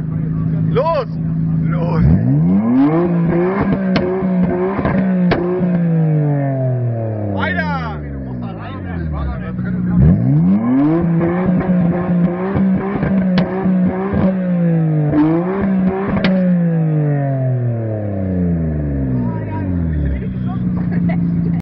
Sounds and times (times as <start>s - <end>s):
Speech: 0.1s - 2.1s, 7.3s - 10.1s, 19.2s - 21.6s.